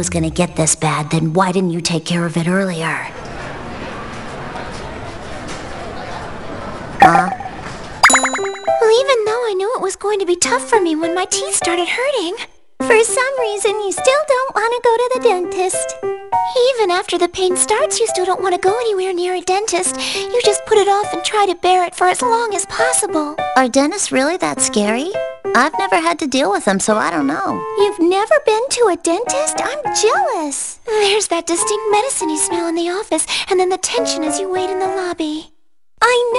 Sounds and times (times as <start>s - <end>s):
Speech: 0.0s - 3.1s, 8.8s - 36.3s
Music: 8.2s - 35.4s.